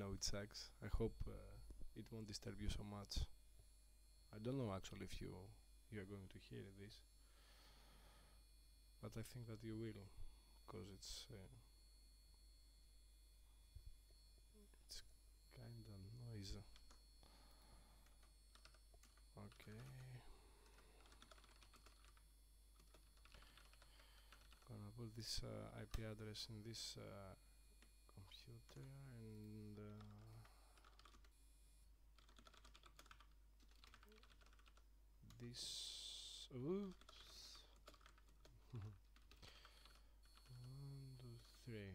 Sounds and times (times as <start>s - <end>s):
Speech: 0.0s - 3.4s, 4.3s - 7.1s, 9.0s - 11.7s, 14.9s - 16.7s, 19.4s - 20.4s, 24.7s - 27.4s, 28.2s - 30.5s, 35.3s - 37.8s, 38.7s - 39.0s, 40.5s - 41.9s
Typing: 18.0s - 22.2s, 22.8s - 24.7s, 29.9s - 31.3s, 32.2s - 35.4s, 36.8s - 40.8s.